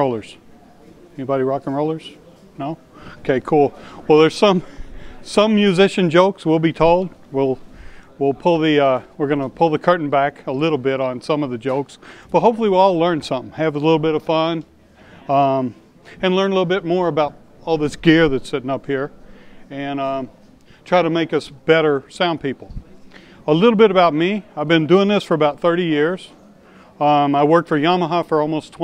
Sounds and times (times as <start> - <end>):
Speech: 0.0 - 26.4, 27.0 - 28.8.